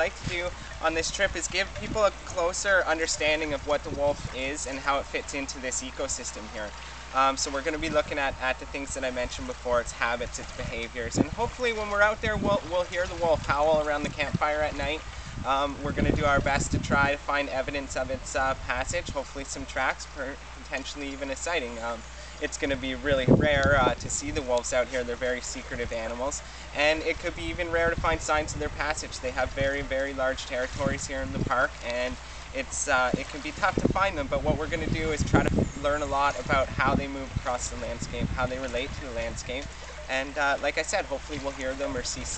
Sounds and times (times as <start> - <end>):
Speech: 0.0 - 42.3.